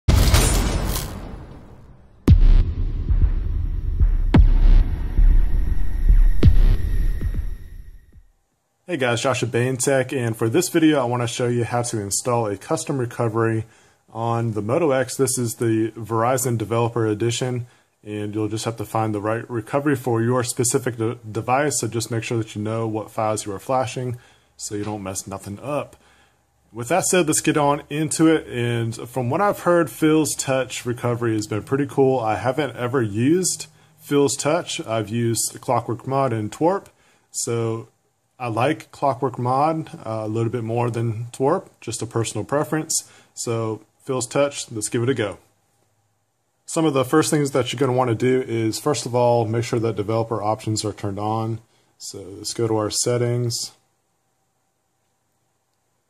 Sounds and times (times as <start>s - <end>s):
Inside, small room: 0.0s - 56.0s
Throbbing: 2.3s - 8.2s
Speech: 8.8s - 26.0s, 26.7s - 45.5s, 46.7s - 53.8s.